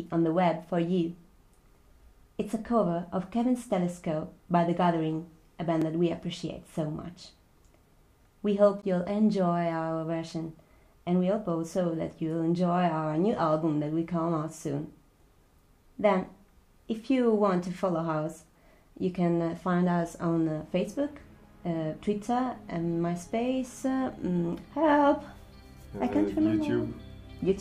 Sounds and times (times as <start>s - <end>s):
Speech: 0.0s - 1.2s, 2.4s - 7.4s, 8.4s - 15.0s, 16.0s - 25.3s, 26.0s - 27.6s.